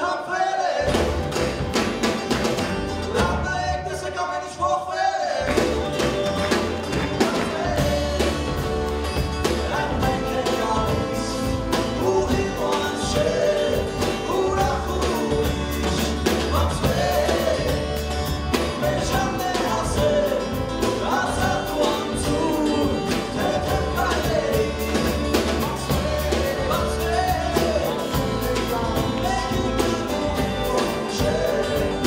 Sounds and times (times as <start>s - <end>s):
Singing: 0.0s - 1.3s, 6.9s - 32.0s
Music: 0.0s - 32.0s.